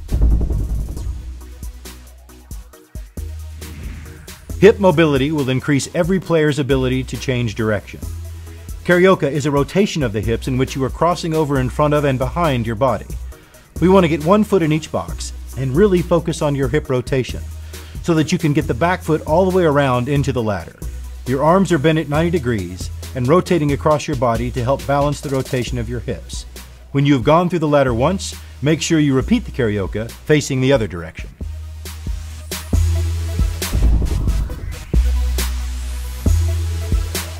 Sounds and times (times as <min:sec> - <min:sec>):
Music: 0:00.0 - 0:37.3
Speech: 0:04.6 - 0:08.1, 0:08.8 - 0:13.2, 0:13.8 - 0:17.4, 0:18.0 - 0:31.4.